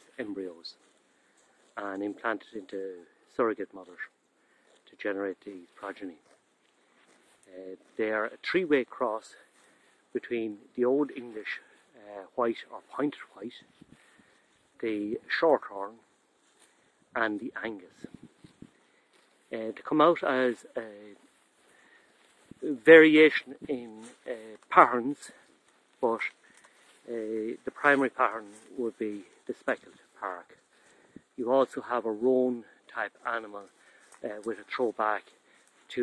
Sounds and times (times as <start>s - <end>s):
Speech: 0.0s - 0.8s, 1.8s - 4.1s, 4.8s - 6.3s, 7.4s - 9.5s, 10.1s - 13.7s, 14.8s - 16.0s, 17.1s - 18.2s, 19.5s - 21.3s, 22.6s - 26.4s, 27.0s - 30.6s, 31.4s - 36.0s.